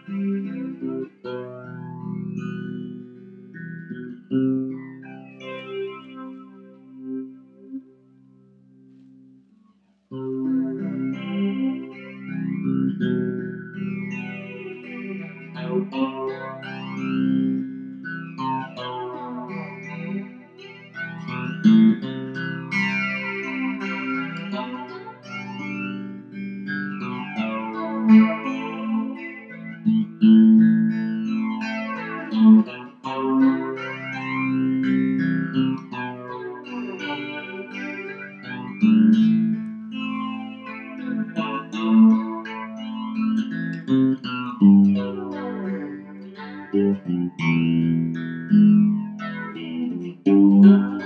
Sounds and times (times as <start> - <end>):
Electric guitar: 0.0 - 51.0.